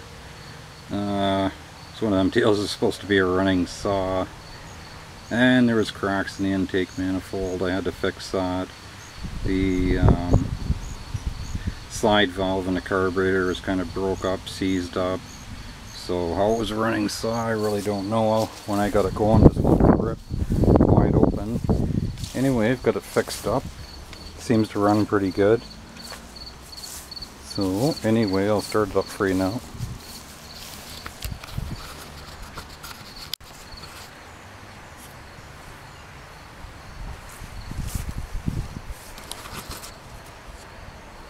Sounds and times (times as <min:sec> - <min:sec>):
Speech: 0:00.9 - 0:04.3, 0:05.3 - 0:08.7, 0:09.5 - 0:10.5, 0:11.9 - 0:15.2, 0:16.0 - 0:20.2, 0:20.9 - 0:21.6, 0:22.3 - 0:23.7, 0:24.4 - 0:25.6, 0:27.5 - 0:29.6.